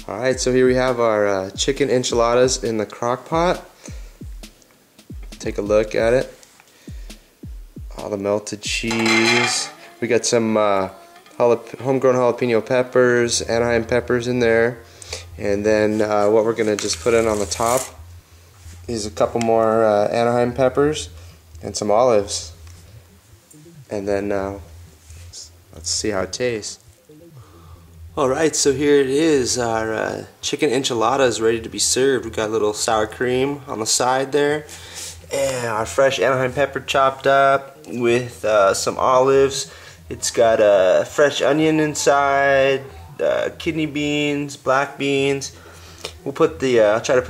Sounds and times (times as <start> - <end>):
Speech: 0.0 - 3.7, 5.4 - 6.4, 7.9 - 14.8, 15.4 - 18.0, 18.9 - 22.6, 23.6 - 24.7, 25.3 - 27.4, 28.2 - 34.7, 35.3 - 45.5, 46.2 - 47.2
Music: 0.0 - 47.2.